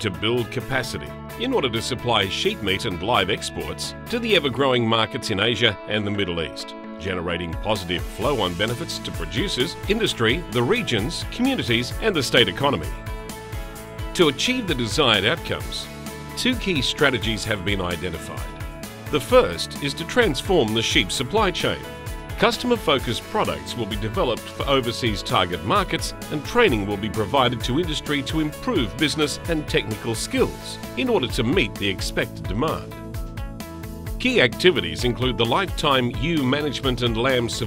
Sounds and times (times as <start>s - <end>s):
Speech: 0.0s - 12.9s, 14.2s - 18.5s, 19.1s - 21.8s, 22.4s - 32.9s, 34.2s - 37.6s
Music: 0.0s - 37.6s.